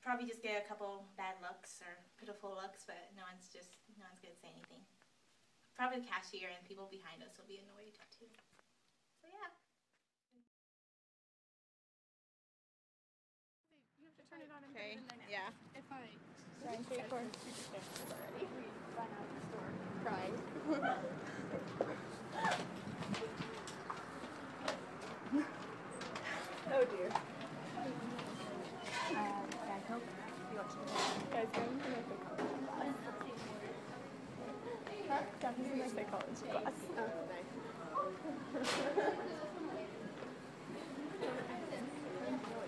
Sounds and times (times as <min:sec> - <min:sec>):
Female speech, woman speaking: 0:00.0 - 0:04.9, 0:05.8 - 0:08.4, 0:09.2 - 0:09.6, 0:13.8 - 0:20.5, 0:26.6 - 0:38.2, 0:41.2 - 0:42.6.